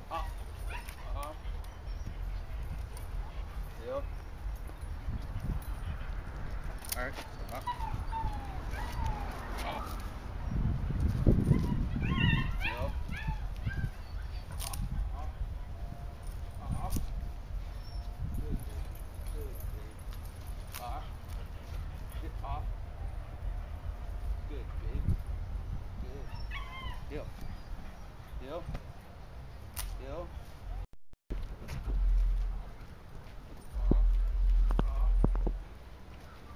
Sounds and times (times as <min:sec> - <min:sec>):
Yip: 0:00.2 - 0:02.2, 0:07.2 - 0:10.1, 0:11.4 - 0:14.8, 0:26.2 - 0:27.1
Whimper (dog): 0:07.1 - 0:10.1, 0:11.4 - 0:14.8, 0:26.2 - 0:28.0.